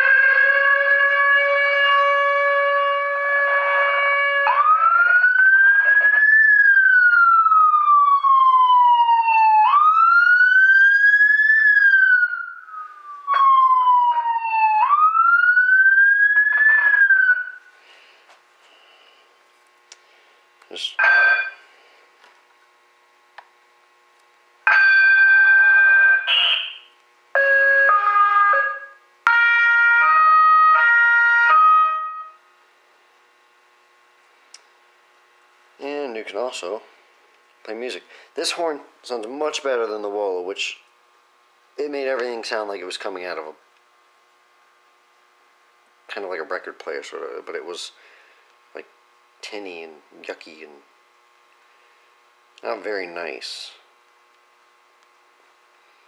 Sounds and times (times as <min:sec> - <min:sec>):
Siren: 0:00.0 - 0:17.7, 0:21.0 - 0:21.6, 0:24.6 - 0:32.5.